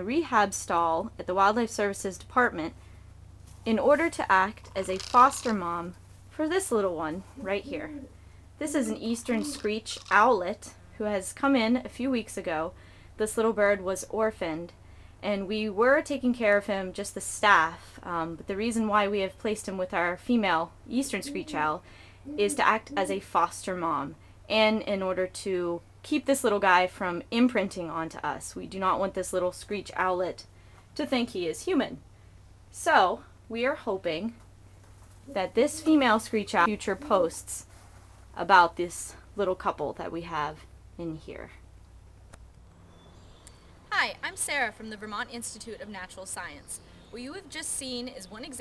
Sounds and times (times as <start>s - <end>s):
Speech: 0.0s - 2.8s, 3.7s - 32.0s, 32.8s - 34.4s, 35.3s - 37.7s, 38.4s - 41.6s, 44.0s - 48.6s.